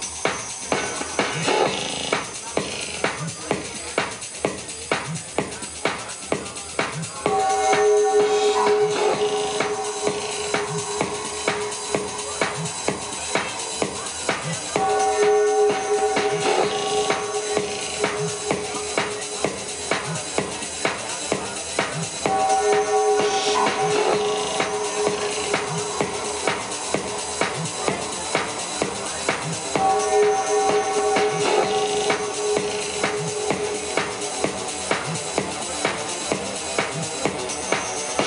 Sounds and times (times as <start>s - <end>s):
Music: 0.0s - 38.2s
Speech: 0.0s - 38.2s.